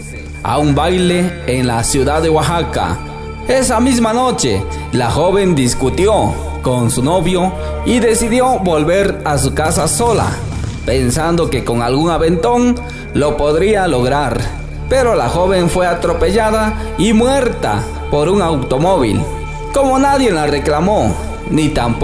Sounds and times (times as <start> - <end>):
Music: 0.0 - 22.0
Speech: 0.0 - 22.0.